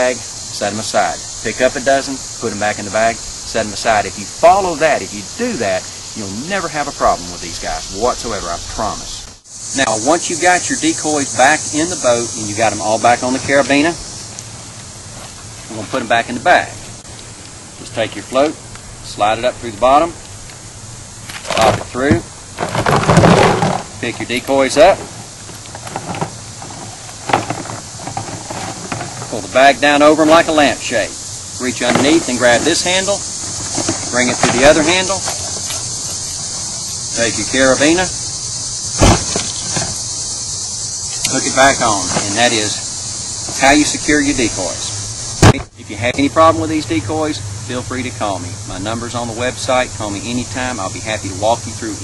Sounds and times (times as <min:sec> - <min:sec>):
Speech: 0:00.0 - 0:09.2, 0:09.8 - 0:14.0, 0:15.7 - 0:16.8, 0:17.8 - 0:20.2, 0:21.6 - 0:22.3, 0:24.0 - 0:25.0, 0:29.3 - 0:33.2, 0:34.1 - 0:35.3, 0:37.2 - 0:38.1, 0:41.2 - 0:42.8, 0:43.6 - 0:52.0.